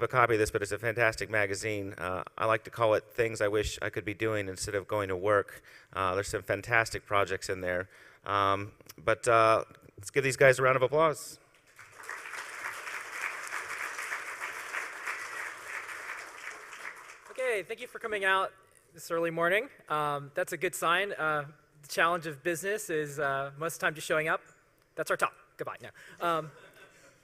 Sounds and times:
Speech: 0.0 - 11.4, 17.3 - 24.4, 25.0 - 26.6.

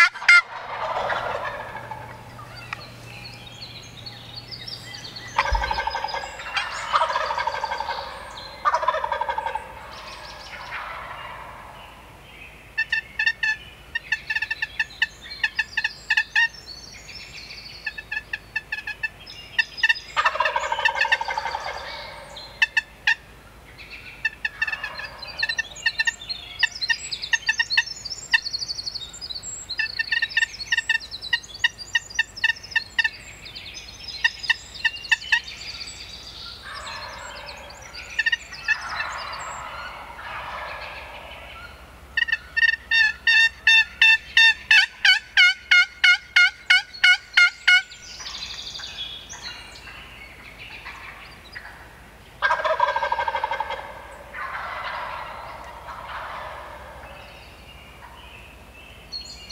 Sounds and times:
Bird: 0.0 - 59.5.

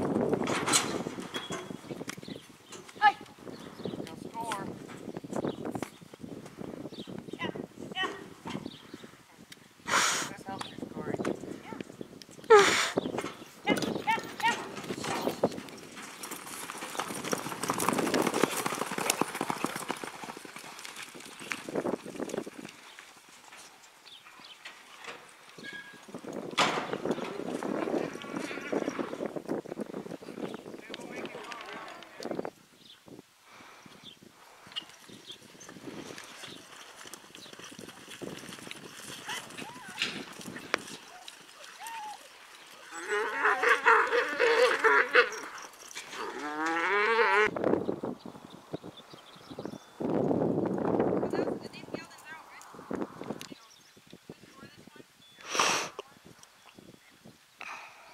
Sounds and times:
Clip-clop: 0.0 - 33.0, 33.8 - 55.0.

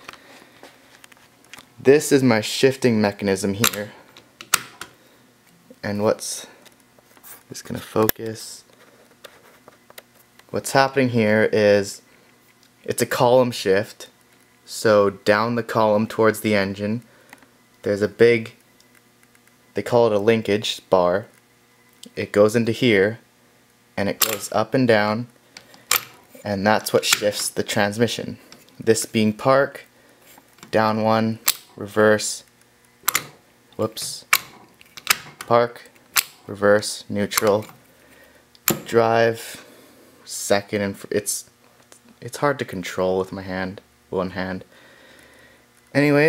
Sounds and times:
Speech: 1.8 - 4.0, 5.7 - 6.6, 7.5 - 8.7, 10.5 - 12.0, 12.8 - 17.1, 17.8 - 18.6, 19.8 - 21.3, 22.0 - 23.3, 24.0 - 25.3, 26.4 - 29.9, 30.7 - 32.5, 33.8 - 34.3, 35.5 - 35.9, 36.5 - 37.7, 38.8 - 39.6, 40.2 - 41.5, 42.2 - 44.7, 45.9 - 46.2.

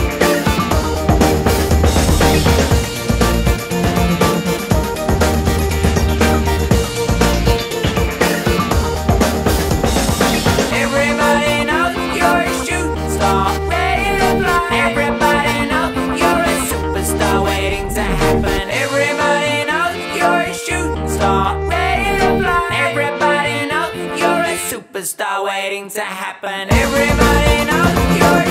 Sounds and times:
Bass drum: 0.0 - 10.8, 26.8 - 28.5
Drum kit: 0.0 - 11.5, 26.7 - 28.5.

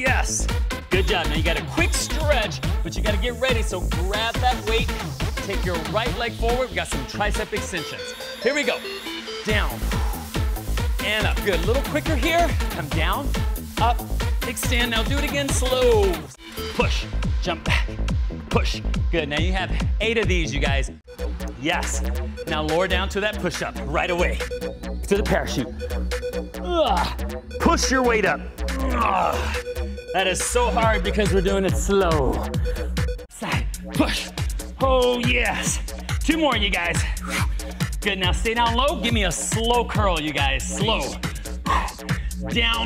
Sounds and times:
Music: 0.0 - 42.8
Speech: 11.0 - 13.2, 13.8 - 17.9, 18.5 - 20.9, 30.2 - 32.4, 34.8 - 37.0, 38.0 - 41.2.

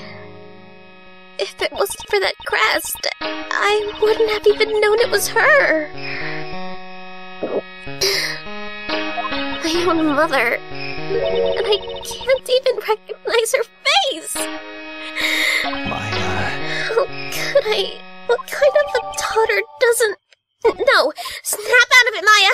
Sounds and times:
Music: 0.0 - 20.2
Speech: 1.4 - 5.9, 9.6 - 10.6, 11.6 - 14.5, 15.9 - 22.5.

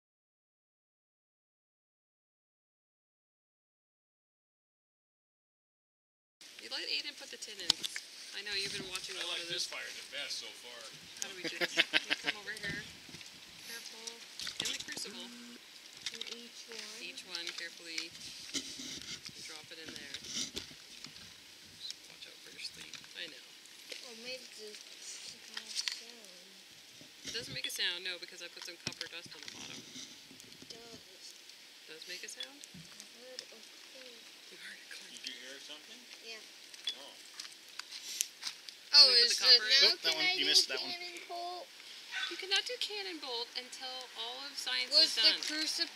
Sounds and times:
Speech: 6.6 - 12.9, 13.7 - 18.2, 19.4 - 20.2, 21.8 - 23.4, 24.0 - 26.6, 27.3 - 29.8, 30.7 - 31.3, 31.9 - 37.2, 39.0 - 45.9.

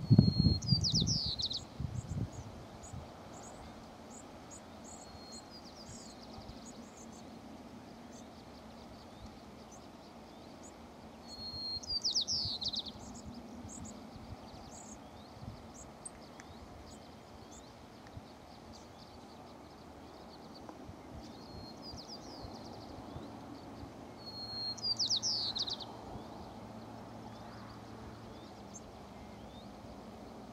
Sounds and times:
Chirp, tweet: 0.0 - 7.4, 8.0 - 30.5.

